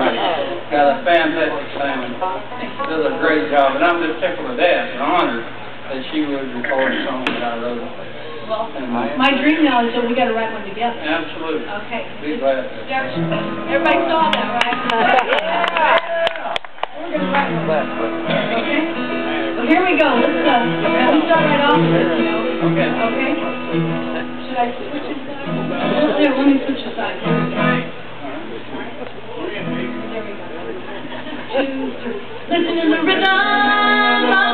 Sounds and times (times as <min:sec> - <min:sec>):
Music: 0:17.0 - 0:26.3, 0:27.2 - 0:27.9.